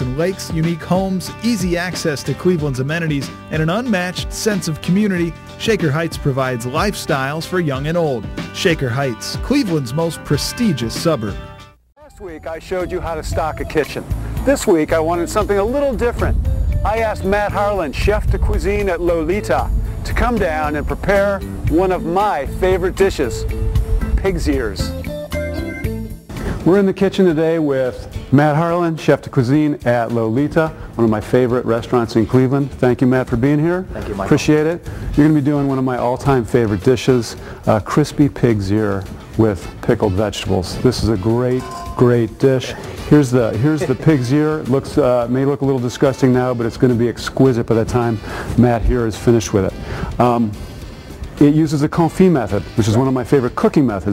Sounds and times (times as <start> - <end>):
Speech: 0.0 - 11.4, 12.0 - 23.4, 24.2 - 24.9, 26.6 - 50.6, 51.4 - 54.1
Music: 0.0 - 54.1.